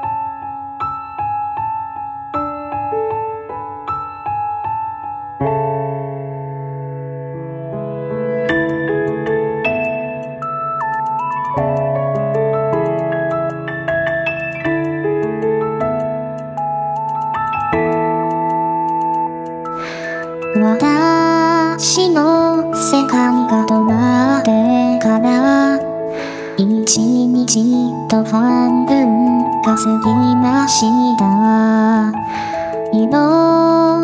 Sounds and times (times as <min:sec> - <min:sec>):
Music: 0:00.0 - 0:34.0.